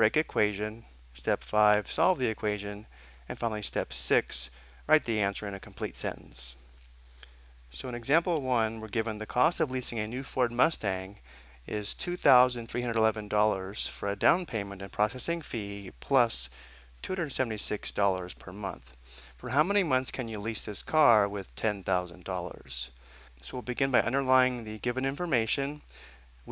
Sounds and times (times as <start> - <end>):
Speech: 0.0 - 6.6, 7.7 - 25.9.